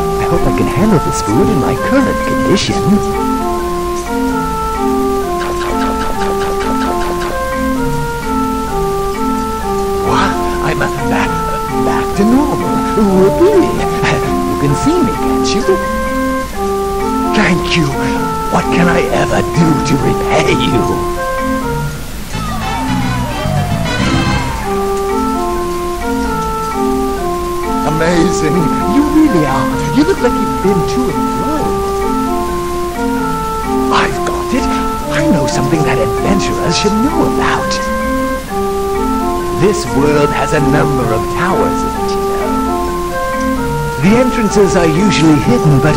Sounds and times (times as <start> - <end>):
Music: 0.0 - 45.9
Speech: 0.2 - 3.2, 10.1 - 15.8, 17.4 - 21.0, 27.8 - 31.7, 33.9 - 37.9, 39.6 - 42.2, 44.0 - 45.9.